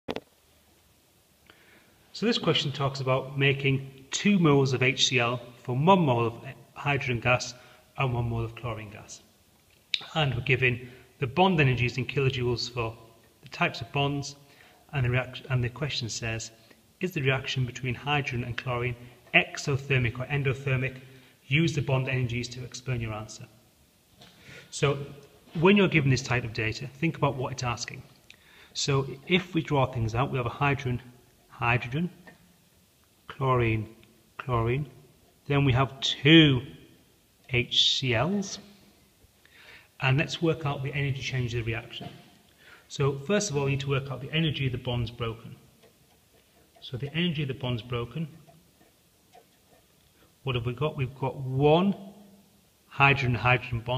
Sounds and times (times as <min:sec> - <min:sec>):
Inside, small room: 0:00.0 - 0:53.9
Speech: 0:02.1 - 0:09.3, 0:10.0 - 0:23.6, 0:24.7 - 0:28.2, 0:28.8 - 0:32.2, 0:33.3 - 0:36.8, 0:37.5 - 0:38.8, 0:40.0 - 0:42.2, 0:42.9 - 0:45.6, 0:46.8 - 0:48.4, 0:50.4 - 0:52.0, 0:52.9 - 0:53.9.